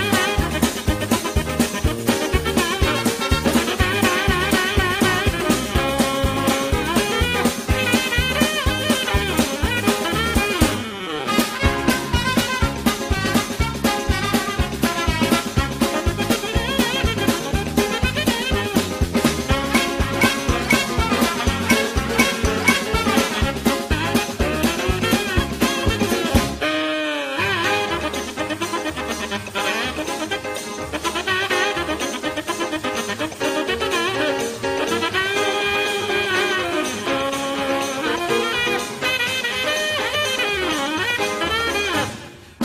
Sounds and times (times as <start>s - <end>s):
Music: 0.0s - 42.6s.